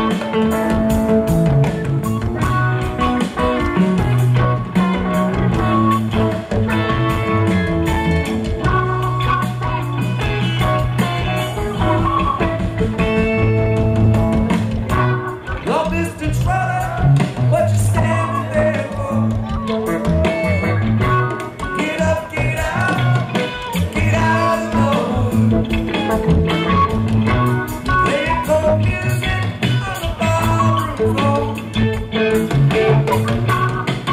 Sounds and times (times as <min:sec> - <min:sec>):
Music: 0:00.0 - 0:34.1.